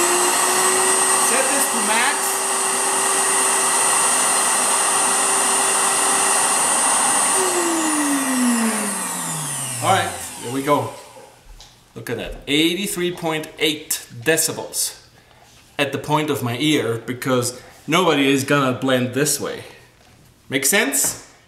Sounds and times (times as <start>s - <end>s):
Blender: 0.0s - 11.4s
Speech: 1.2s - 2.4s, 9.8s - 11.0s, 12.0s - 15.1s, 15.8s - 19.8s, 20.5s - 21.3s.